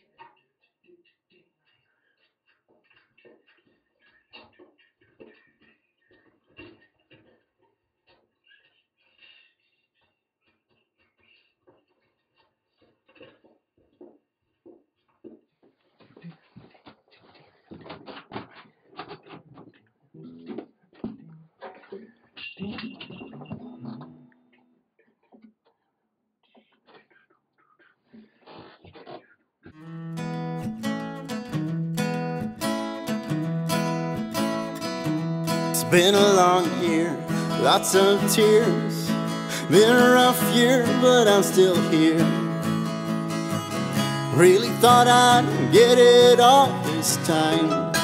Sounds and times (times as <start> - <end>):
Acoustic guitar: 20.2 - 24.4, 29.8 - 48.0.